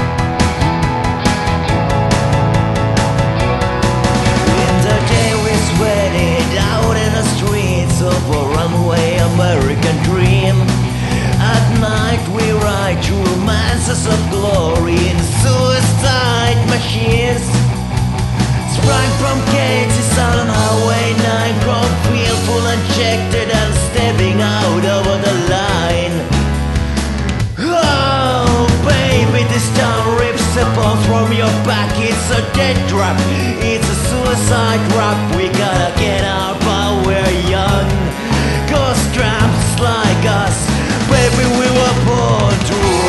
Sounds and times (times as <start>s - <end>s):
Music: 0.0s - 43.0s.